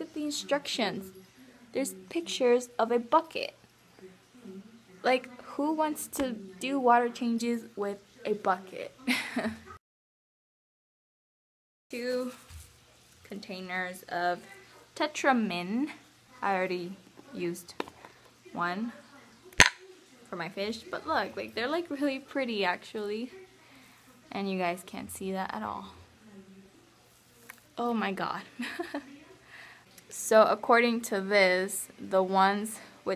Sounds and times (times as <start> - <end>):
Inside, small room: 0.0 - 9.8, 11.9 - 33.1
Speech: 0.0 - 9.8, 11.9 - 12.6, 13.2 - 33.1.